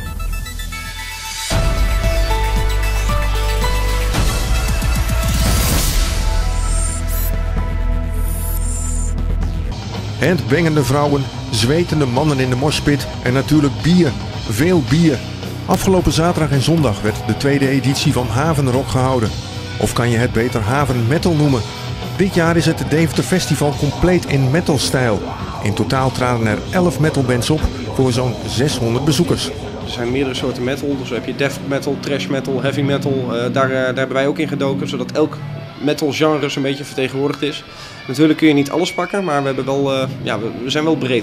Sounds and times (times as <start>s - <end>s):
Speech: 10.2s - 41.2s.